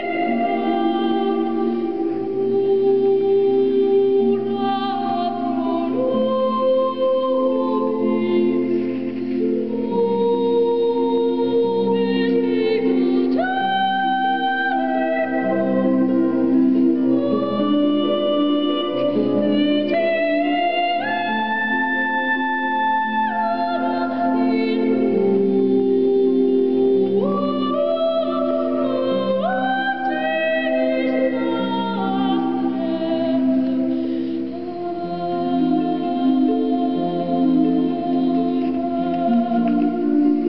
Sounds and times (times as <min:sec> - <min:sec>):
Harp: 0:00.0 - 0:40.4
Singing: 0:00.0 - 0:40.4.